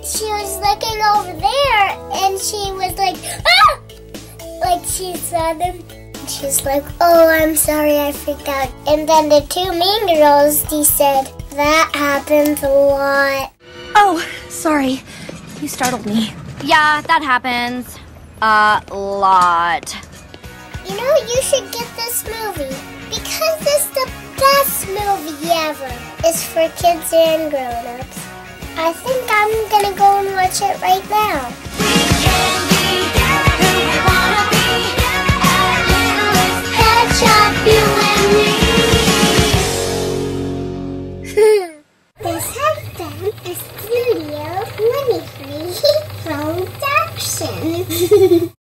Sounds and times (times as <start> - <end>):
Music: 0.0 - 16.8, 19.8 - 41.4, 42.2 - 48.1
Speech: 42.2 - 47.9.